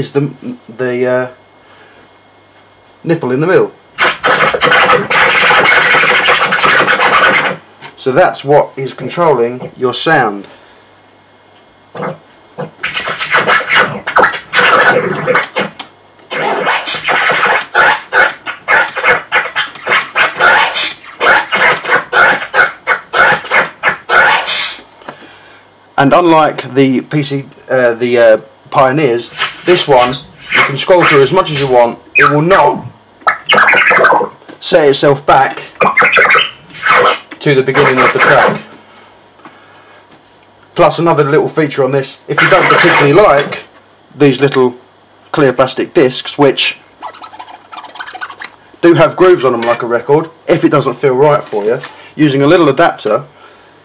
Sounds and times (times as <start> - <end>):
Scratching (performance technique): 4.0 - 7.6, 11.9 - 24.8, 28.8 - 38.7, 42.3 - 43.7, 47.0 - 50.2.